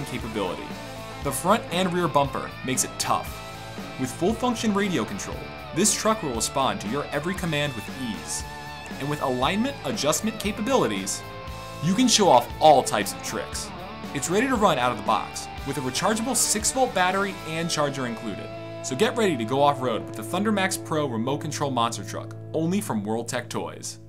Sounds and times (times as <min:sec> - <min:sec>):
Speech: 0:00.0 - 0:03.3, 0:04.0 - 0:11.2, 0:11.8 - 0:24.0
Music: 0:00.0 - 0:24.0.